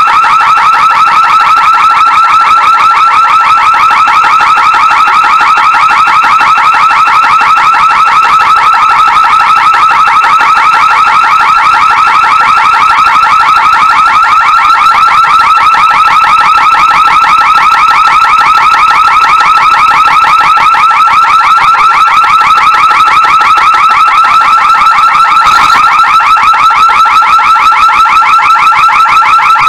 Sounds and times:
Car alarm: 0.0s - 29.6s.

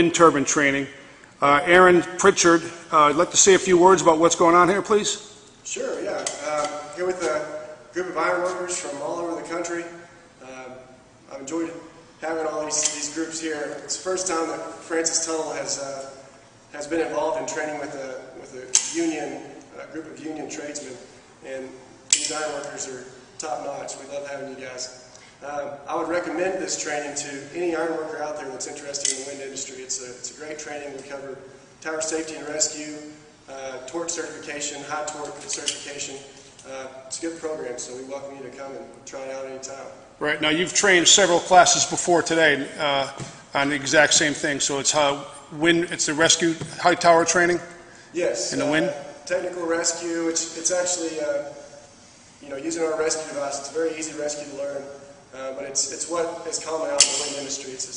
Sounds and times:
Speech: 0.0s - 51.6s, 52.4s - 57.9s.

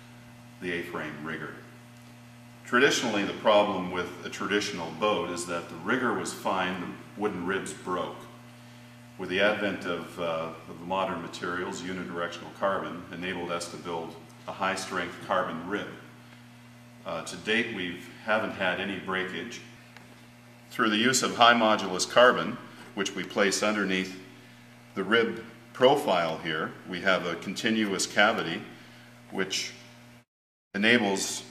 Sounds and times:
Speech: 0.6s - 1.7s, 2.7s - 8.4s, 9.2s - 16.1s, 17.0s - 19.7s, 20.7s - 24.3s, 25.0s - 28.7s, 29.3s - 29.8s, 30.8s - 31.5s.

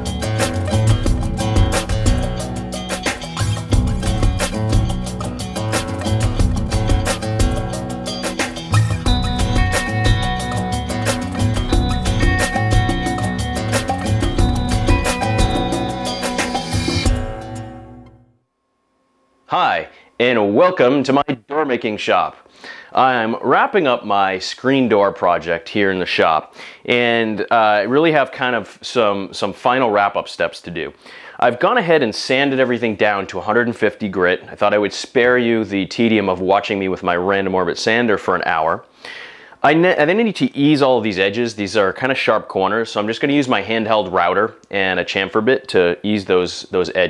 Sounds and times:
Speech: 19.5s - 38.9s, 39.6s - 47.0s.

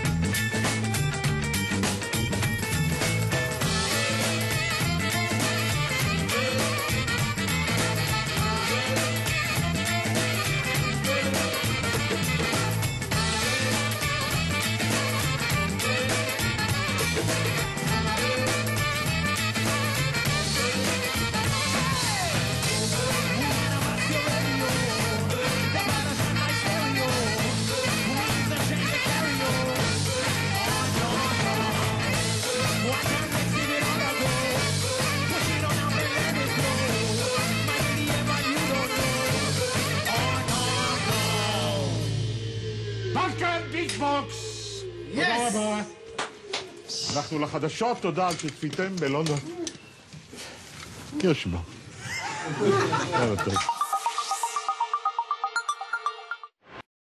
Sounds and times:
Music: 0.0s - 47.7s, 52.7s - 56.8s.

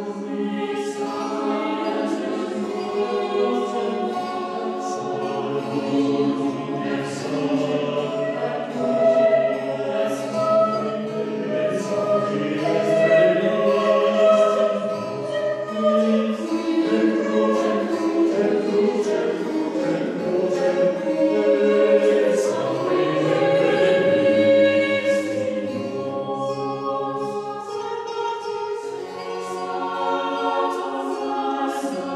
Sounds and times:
Choir: 0.0s - 32.1s.

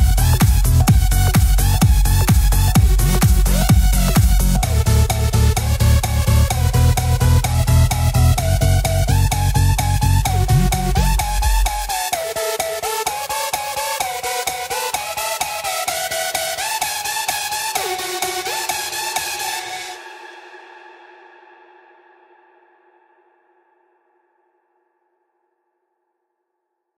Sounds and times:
House music: 0.0s - 20.5s.

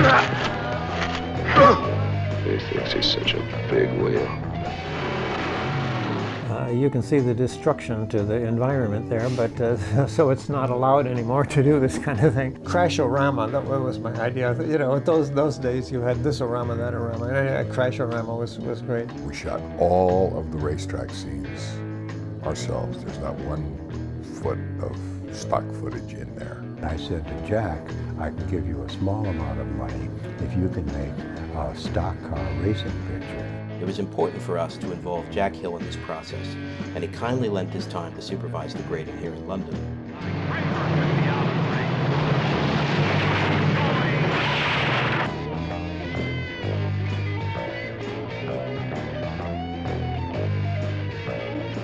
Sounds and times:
Music: 0.0s - 51.8s
Speech: 2.5s - 4.3s, 6.5s - 21.8s, 22.4s - 39.8s.

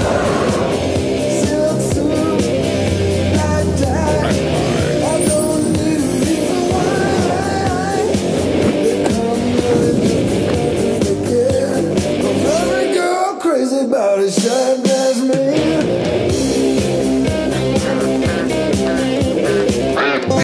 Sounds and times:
Music: 0.0s - 20.4s
Quack: 18.3s - 20.4s.

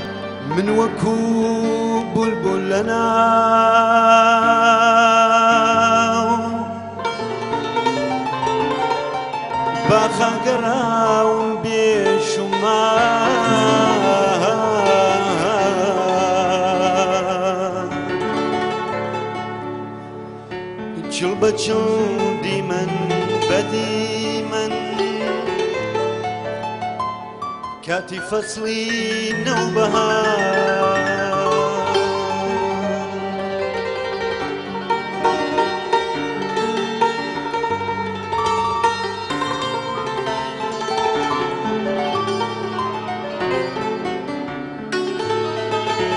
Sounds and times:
Music: 0.0s - 46.1s.

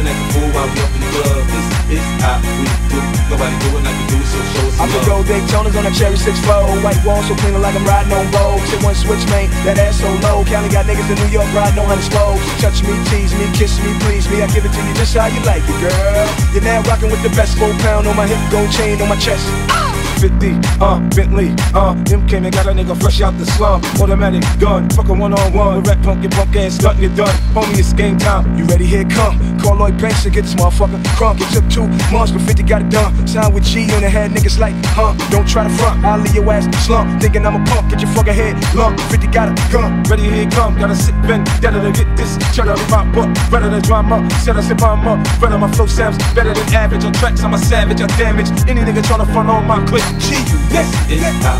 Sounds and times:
Music: 0.0s - 51.5s
Rapping: 0.0s - 51.5s.

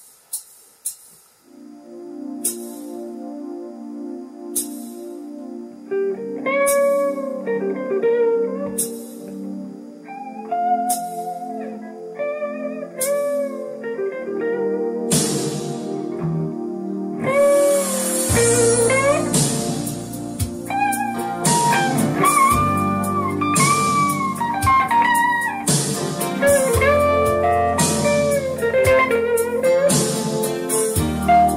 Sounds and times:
Music: 0.0s - 31.5s.

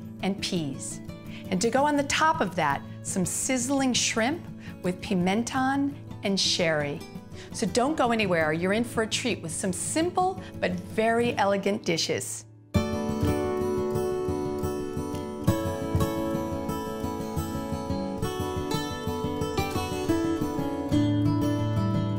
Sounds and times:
Music: 0.0s - 22.1s
Speech: 0.2s - 7.0s, 7.6s - 12.5s.

